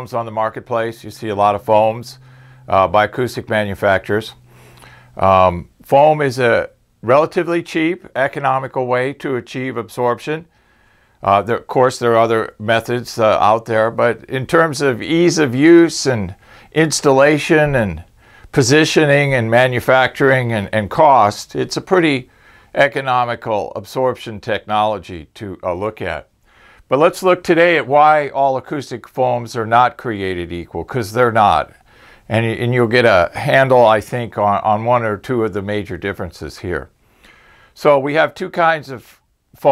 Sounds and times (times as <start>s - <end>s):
Speech: 0.0s - 4.4s, 5.2s - 10.5s, 11.2s - 26.3s, 26.9s - 37.0s, 37.8s - 39.7s.